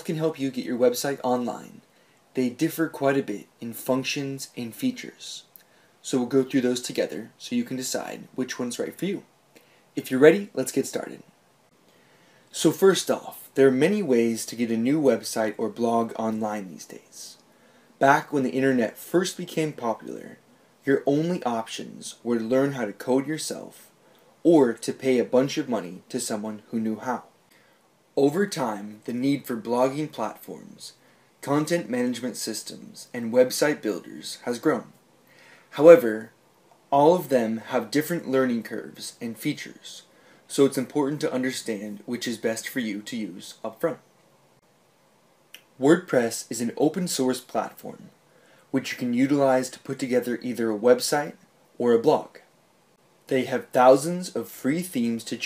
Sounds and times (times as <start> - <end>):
Speech: 0.0 - 9.3, 10.0 - 11.3, 12.5 - 17.4, 18.0 - 27.3, 28.2 - 35.0, 35.7 - 44.0, 45.6 - 52.5, 53.3 - 55.4.